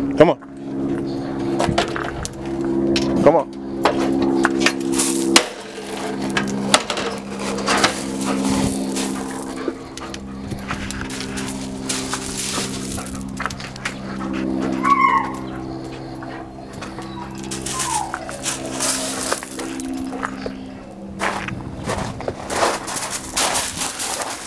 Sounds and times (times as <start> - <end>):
Speech: 0.2 - 0.4, 3.2 - 3.5.